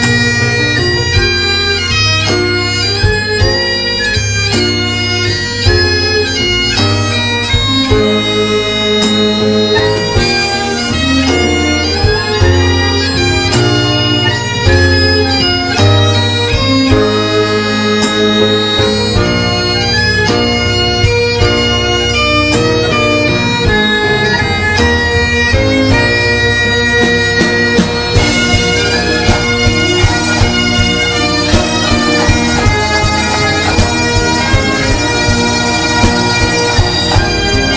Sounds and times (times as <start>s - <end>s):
Bagpipes: 0.0s - 37.7s
Wind instrument, woodwind instrument: 0.0s - 37.7s.